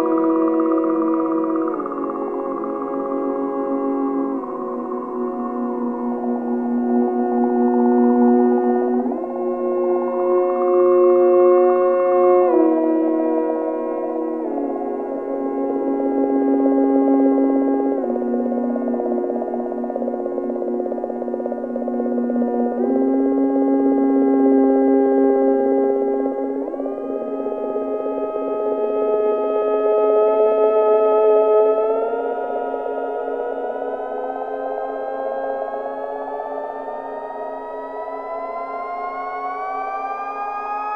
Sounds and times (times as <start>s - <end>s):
Music: 0.0s - 40.9s.